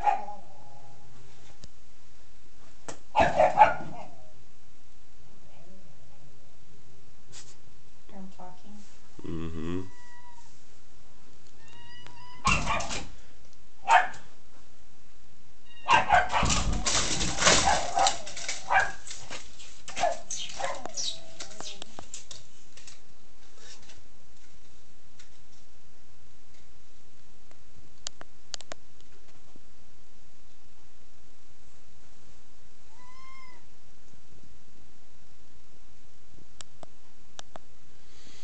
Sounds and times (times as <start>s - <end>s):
Meow: 9.7s - 10.5s, 11.6s - 12.7s, 15.6s - 16.1s, 32.9s - 33.7s.